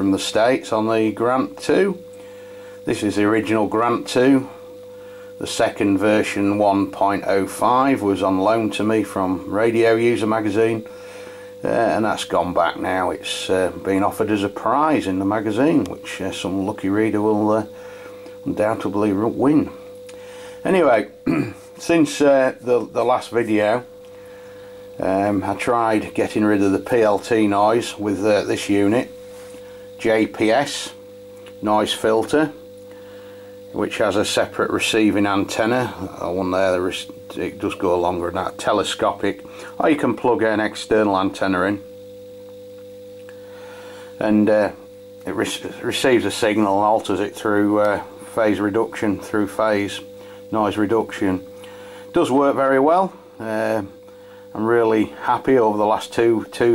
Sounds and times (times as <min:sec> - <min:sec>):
Speech: 0:00.0 - 0:02.0, 0:02.9 - 0:04.6, 0:05.4 - 0:10.9, 0:11.6 - 0:17.7, 0:18.4 - 0:19.8, 0:20.6 - 0:23.9, 0:25.0 - 0:29.1, 0:30.0 - 0:31.0, 0:31.6 - 0:32.6, 0:33.7 - 0:41.9, 0:44.2 - 0:51.5, 0:52.1 - 0:56.7.